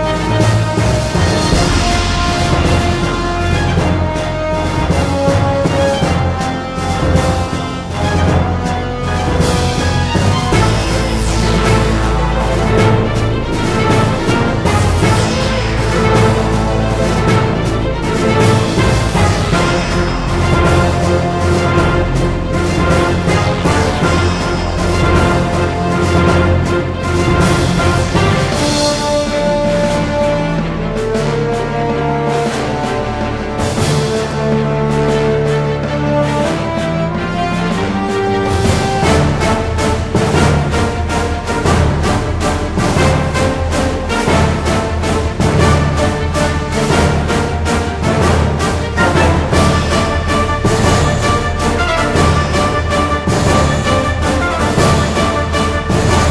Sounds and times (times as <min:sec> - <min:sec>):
Music: 0:00.0 - 0:56.3.